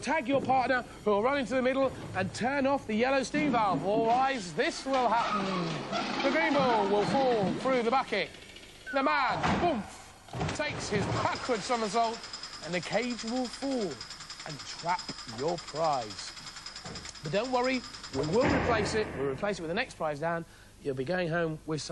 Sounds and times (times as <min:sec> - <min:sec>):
Speech: 0:00.0 - 0:08.3, 0:08.9 - 0:16.3, 0:17.3 - 0:21.9.